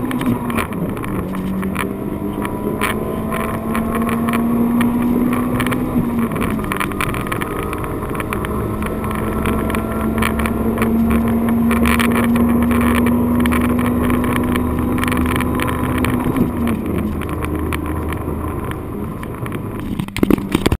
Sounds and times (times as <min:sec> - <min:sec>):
Accelerating, revving, vroom: 0:00.0 - 0:19.8
Medium engine (mid frequency): 0:00.0 - 0:20.7
Vehicle: 0:00.0 - 0:20.7.